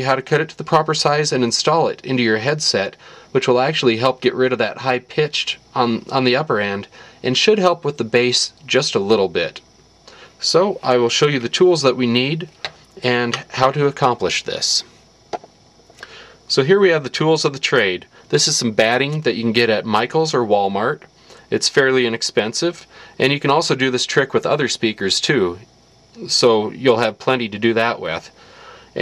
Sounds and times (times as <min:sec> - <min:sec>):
Speech: 0:00.0 - 0:09.7, 0:10.4 - 0:14.9, 0:16.5 - 0:28.4.